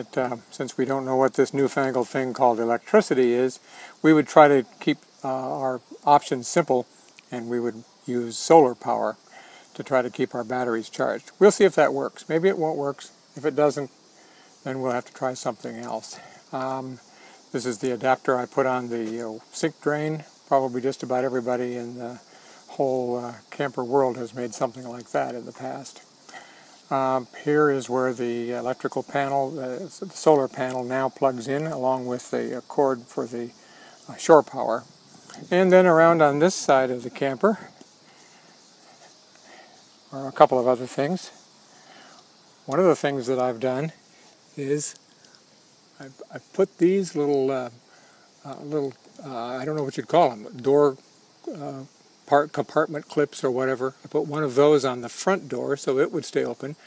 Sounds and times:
Speech: 0.0s - 9.2s, 9.8s - 13.9s, 14.6s - 26.0s, 26.9s - 37.7s, 40.1s - 41.4s, 42.7s - 44.0s, 44.6s - 45.0s, 46.0s - 47.8s, 48.4s - 56.8s.

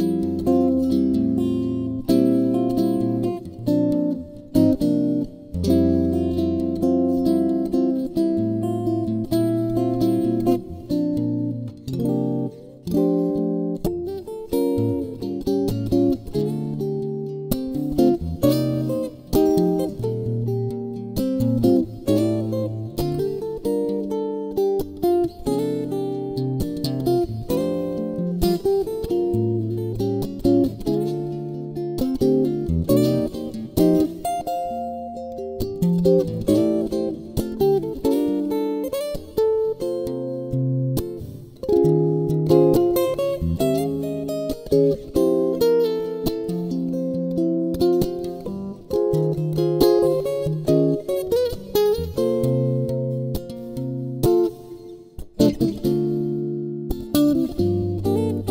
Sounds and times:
Acoustic guitar: 0.0s - 58.5s.

